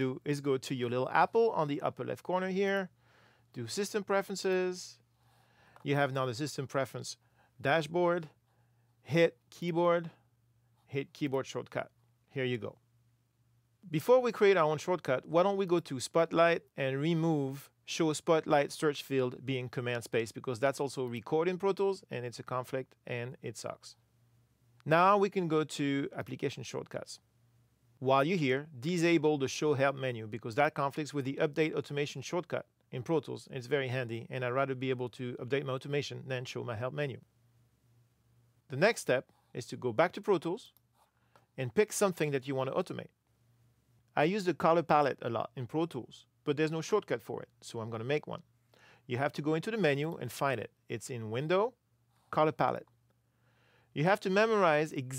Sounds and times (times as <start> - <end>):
Speech: 0.0 - 5.0, 5.8 - 8.4, 9.0 - 10.2, 10.9 - 12.8, 13.8 - 24.0, 24.8 - 27.2, 28.0 - 37.3, 38.7 - 40.8, 41.6 - 43.2, 44.2 - 48.5, 49.1 - 52.9, 54.0 - 55.1.